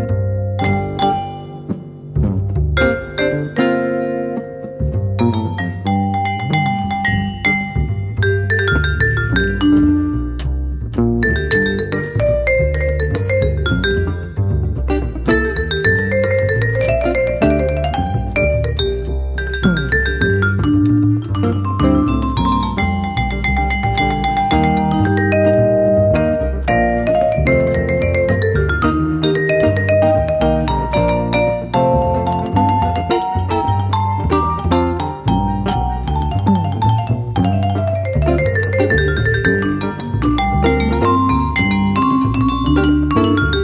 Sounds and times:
Marimba, xylophone: 0.0 - 43.6
Vibraphone: 0.0 - 43.6.

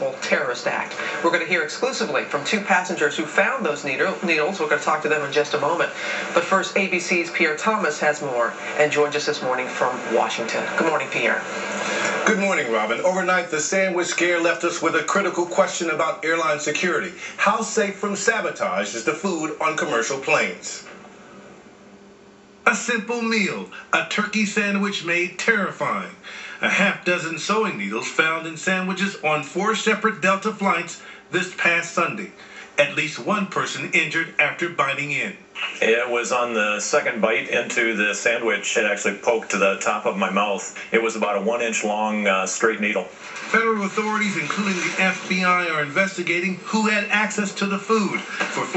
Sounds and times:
Speech: 0.0 - 21.0, 22.7 - 48.7.

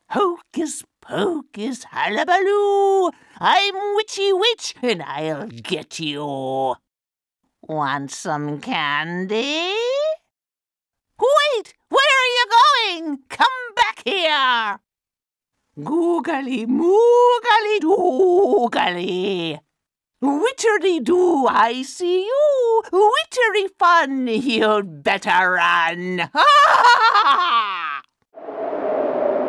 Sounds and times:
Speech: 0.1 - 6.8, 7.6 - 10.3, 11.2 - 14.8, 15.8 - 19.6, 20.2 - 26.4.

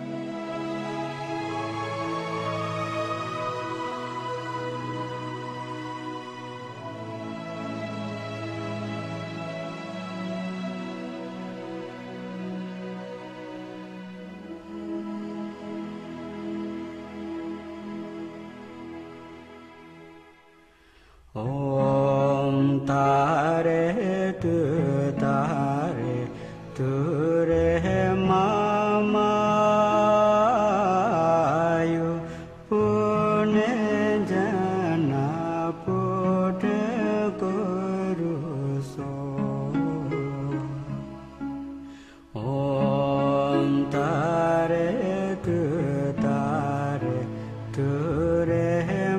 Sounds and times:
Mantra: 21.4 - 41.1, 42.4 - 49.1.

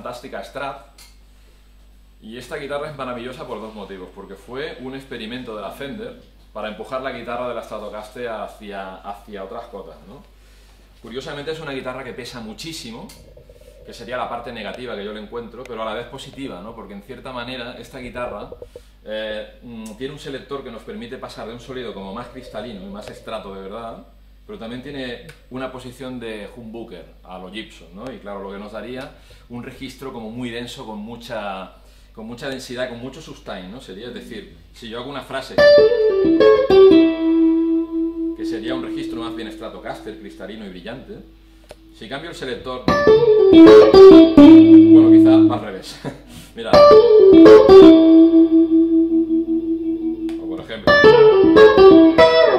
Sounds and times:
Speech: 0.0 - 1.0, 2.2 - 10.3, 11.0 - 13.2, 13.9 - 35.6, 38.4 - 41.3, 42.0 - 42.9, 44.9 - 46.8, 50.4 - 51.0.

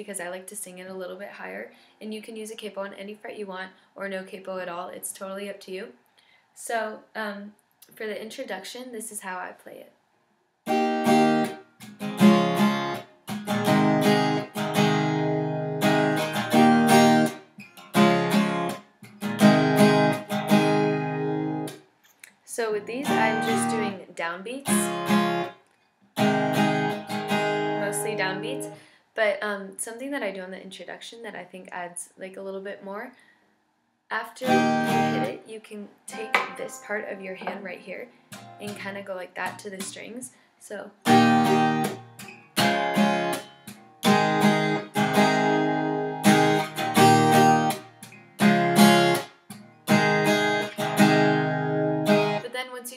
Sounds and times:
Speech: 0.0 - 6.0, 6.6 - 10.0, 22.4 - 25.0, 27.8 - 33.2, 34.1 - 41.0, 52.4 - 52.9
Acoustic guitar: 10.7 - 28.8, 34.4 - 35.4, 36.1 - 40.1, 41.0 - 52.9.

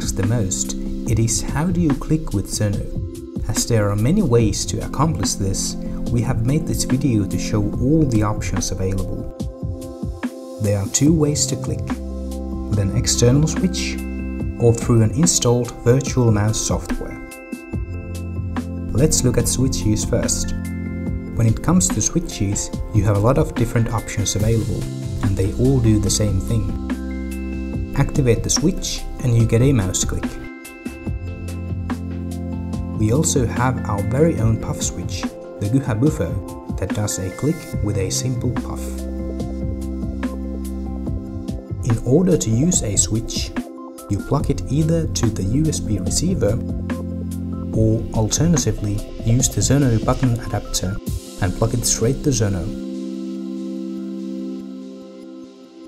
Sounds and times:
Speech: 0.0 - 9.3, 10.6 - 12.0, 12.7 - 17.2, 18.9 - 20.6, 21.3 - 26.8, 27.9 - 30.4, 33.0 - 39.0, 41.8 - 46.7, 47.7 - 52.8
Music: 0.0 - 55.8.

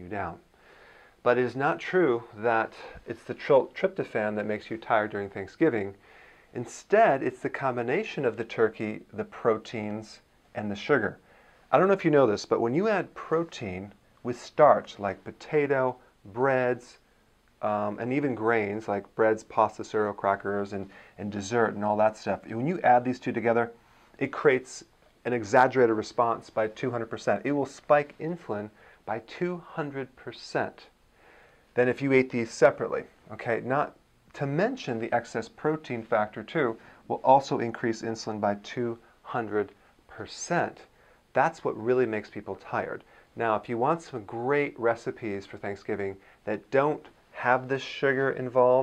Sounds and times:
Speech: 0.0 - 0.5, 1.2 - 6.0, 6.6 - 17.0, 17.6 - 31.0, 31.8 - 48.8.

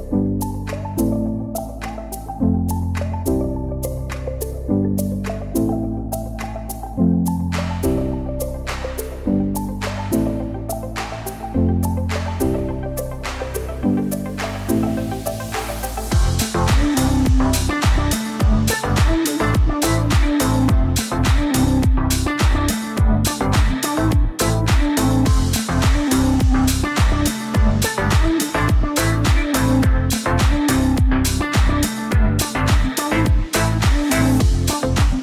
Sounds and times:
Music: 0.0 - 35.2.

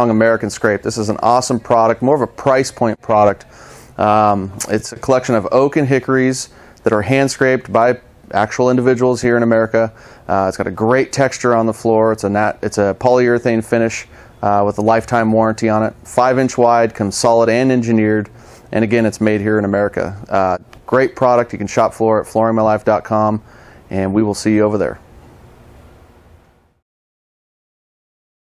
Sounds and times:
Speech: 0.0 - 25.0.

